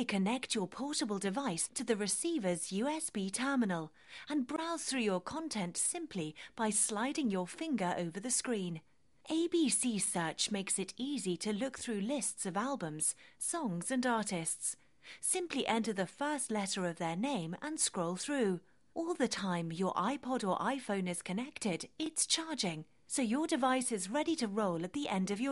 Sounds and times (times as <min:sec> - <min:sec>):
Speech: 0:00.0 - 0:25.5.